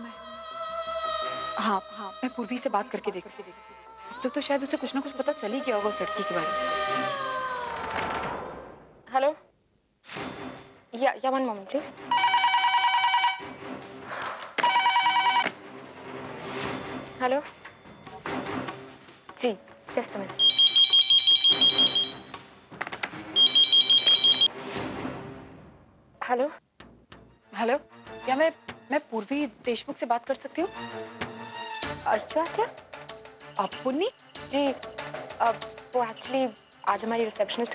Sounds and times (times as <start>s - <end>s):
Music: 0.0s - 8.3s, 10.1s - 37.7s.